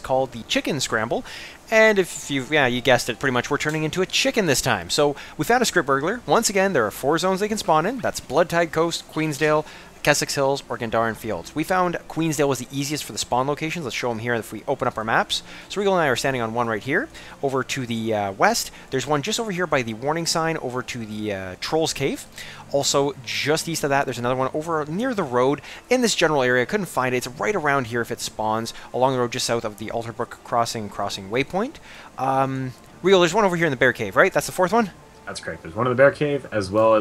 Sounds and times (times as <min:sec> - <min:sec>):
Speech: 0:00.0 - 0:37.0.